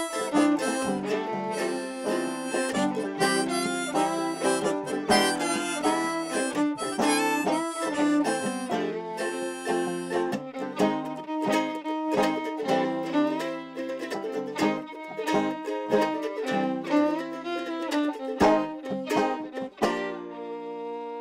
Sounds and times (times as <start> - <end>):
Pizzicato: 0.0 - 21.2.